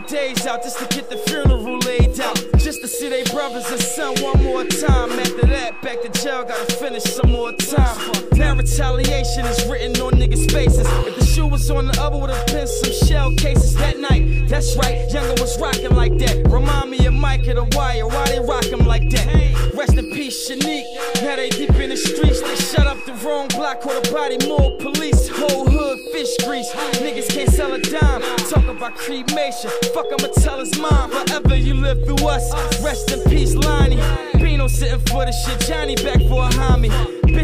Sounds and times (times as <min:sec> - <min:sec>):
Hip hop music: 0:00.0 - 0:37.4
Rapping: 0:00.0 - 0:37.4.